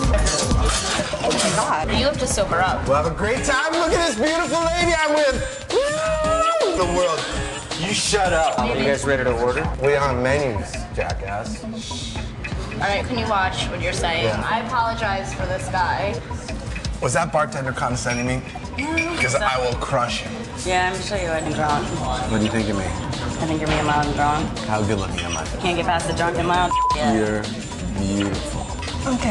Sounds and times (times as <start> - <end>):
Music: 0.0 - 29.3.